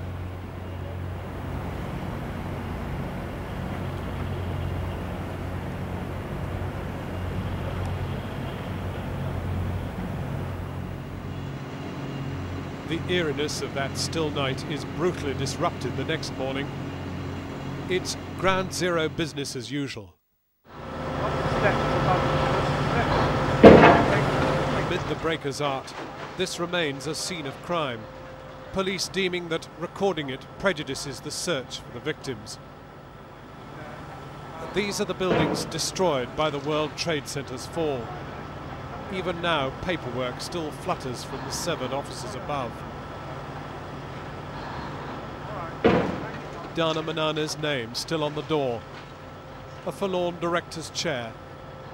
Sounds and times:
Outside, urban or manmade: 0.0 - 51.9.

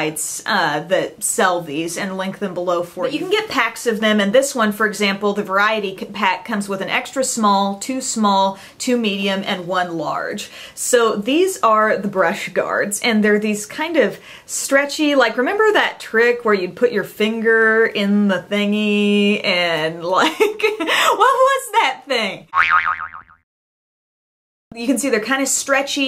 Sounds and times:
Speech: 0.0 - 22.5, 24.7 - 26.0
Inside, small room: 0.0 - 22.6, 24.7 - 26.0
Boing: 22.5 - 23.4.

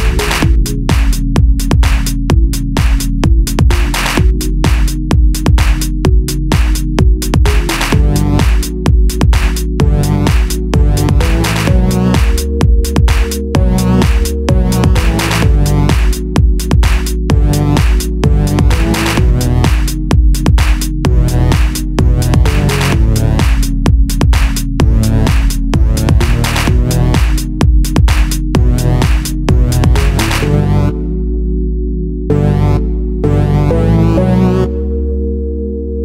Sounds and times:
House music: 0.0 - 35.4
Electronica: 0.0 - 36.0.

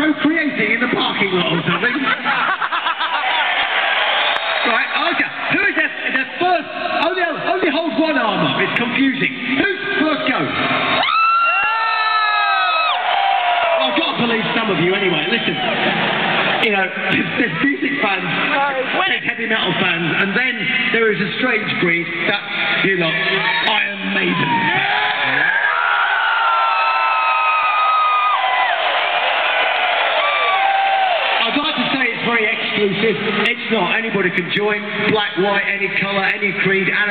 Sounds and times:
Male speech, man speaking: 0.0 - 2.3, 4.6 - 10.6, 13.8 - 15.6, 16.6 - 25.5, 31.4 - 37.1.

